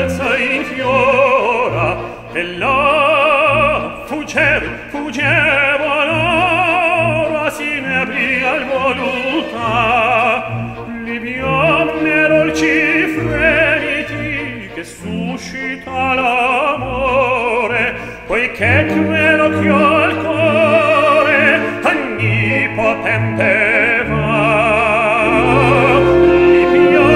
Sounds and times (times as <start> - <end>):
Music: 0.0 - 27.1.